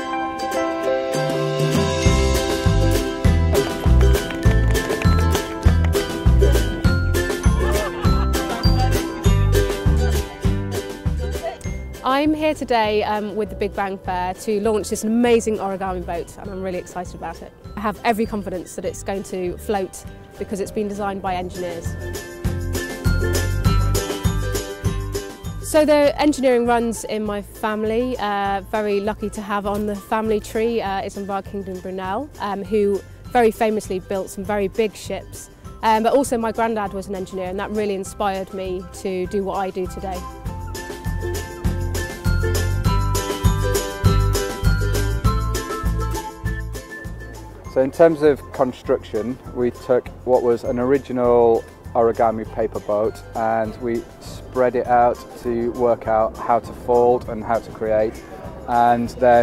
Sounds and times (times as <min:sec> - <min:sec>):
Music: 0:00.0 - 0:59.4.